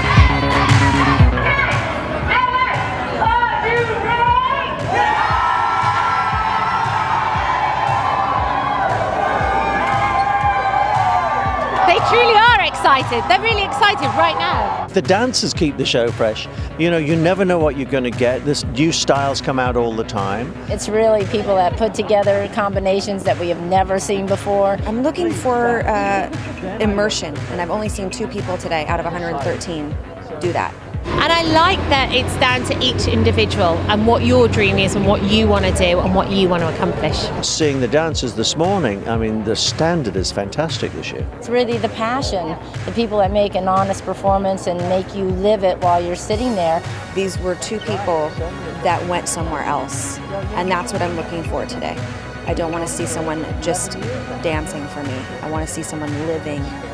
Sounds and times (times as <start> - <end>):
Music: 0.0 - 56.9.